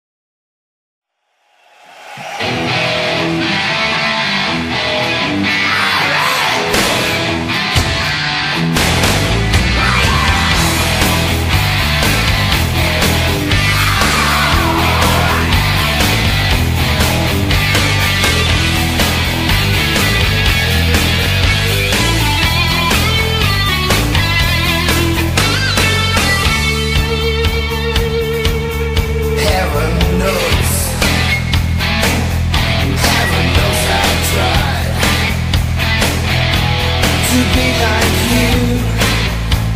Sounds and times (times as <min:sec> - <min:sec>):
Music: 0:01.5 - 0:39.7.